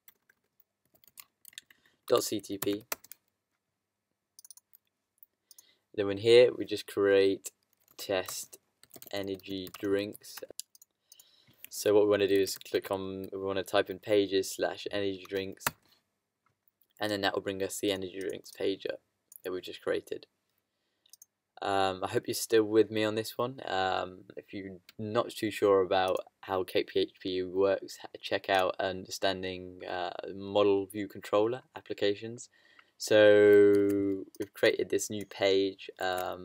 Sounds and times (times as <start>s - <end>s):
Speech: 2.1s - 2.9s, 6.0s - 10.6s, 11.7s - 15.7s, 17.0s - 20.3s, 21.6s - 36.4s
Clicking: 4.4s - 4.7s, 21.1s - 21.3s.